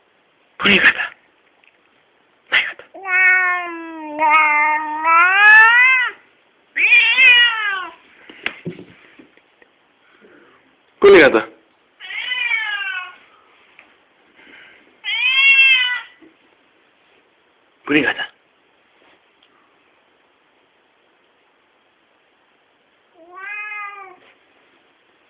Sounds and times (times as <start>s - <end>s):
Speech: 0.6s - 1.2s, 11.0s - 11.6s, 17.8s - 18.4s
Meow: 3.0s - 6.2s, 6.8s - 8.0s, 12.0s - 13.2s, 15.0s - 16.2s, 23.1s - 24.4s.